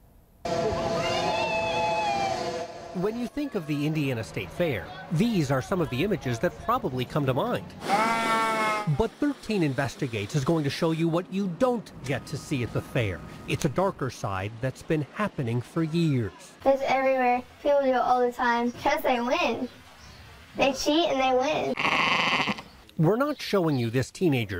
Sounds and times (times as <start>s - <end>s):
Speech: 8.9s - 19.7s, 23.0s - 24.5s.